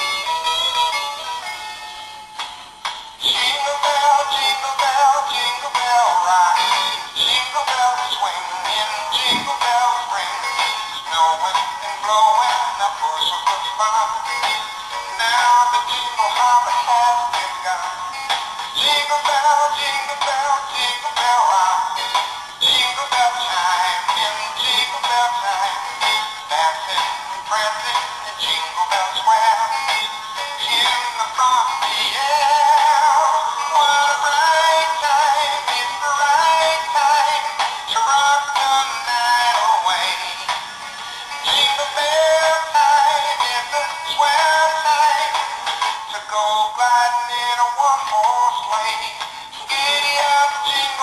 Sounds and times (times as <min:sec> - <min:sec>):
Music: 0:00.0 - 0:51.0.